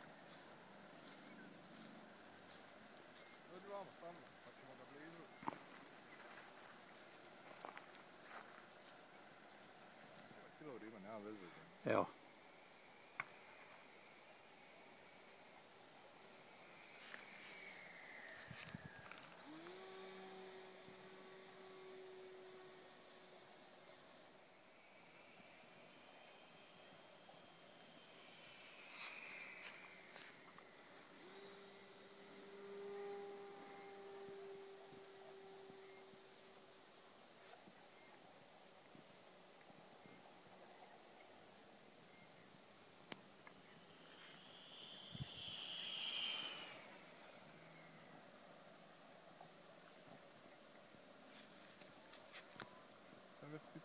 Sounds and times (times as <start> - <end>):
Speech: 3.5 - 5.4, 53.4 - 53.8.